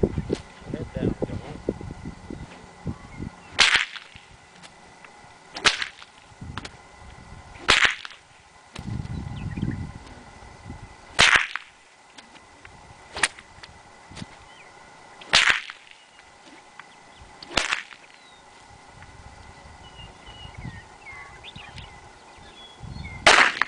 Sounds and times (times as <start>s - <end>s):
Whip: 3.6s - 4.2s, 5.6s - 6.1s, 7.6s - 8.2s, 11.2s - 11.7s, 13.2s - 13.4s, 15.3s - 16.0s, 17.4s - 18.0s, 23.3s - 23.6s.